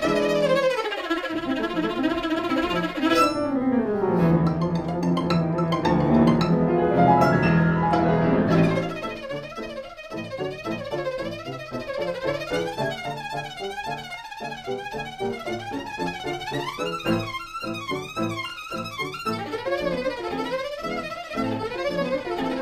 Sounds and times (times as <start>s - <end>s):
Violin, fiddle: 0.0s - 3.6s, 4.2s - 22.6s.